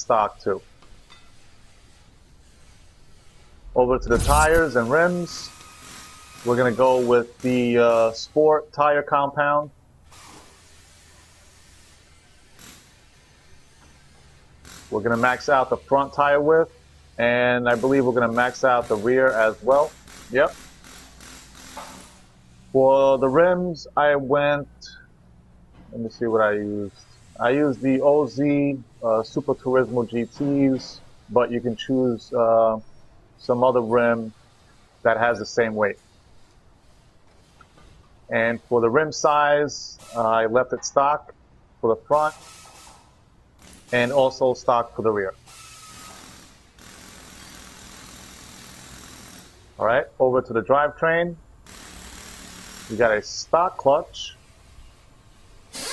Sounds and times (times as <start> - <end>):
Speech: 0.0 - 0.6, 3.8 - 5.5, 6.5 - 9.7, 14.9 - 20.5, 22.8 - 25.0, 25.9 - 32.8, 33.4 - 34.3, 35.1 - 36.0, 38.3 - 42.4, 43.9 - 45.4, 49.8 - 51.4, 52.9 - 54.4.